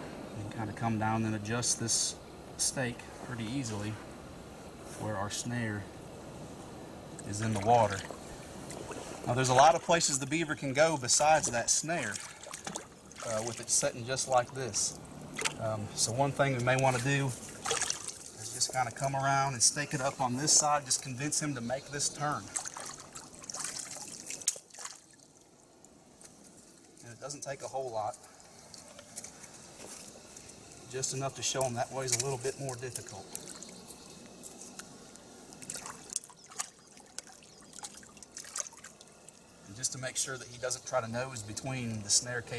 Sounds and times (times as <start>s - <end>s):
Outside, rural or natural: 0.0s - 42.5s
Water: 0.0s - 42.5s
Speech: 0.4s - 4.0s, 4.9s - 5.9s, 7.2s - 8.1s, 9.3s - 12.2s, 13.2s - 15.0s, 15.6s - 17.4s, 18.4s - 22.5s, 27.0s - 28.2s, 30.9s - 33.4s, 39.7s - 42.5s.